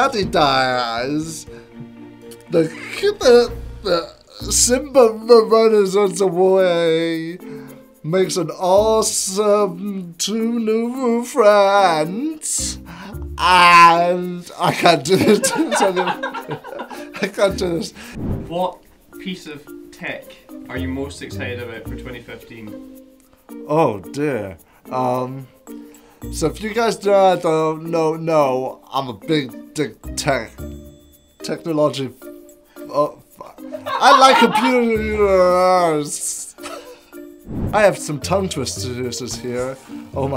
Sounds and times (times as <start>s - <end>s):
Speech: 0.0s - 1.5s, 2.5s - 7.4s, 8.1s - 12.8s, 13.4s - 16.1s, 17.2s - 22.8s, 23.7s - 25.5s, 26.4s - 30.6s, 31.4s - 32.2s, 32.9s - 36.6s, 37.7s - 40.3s.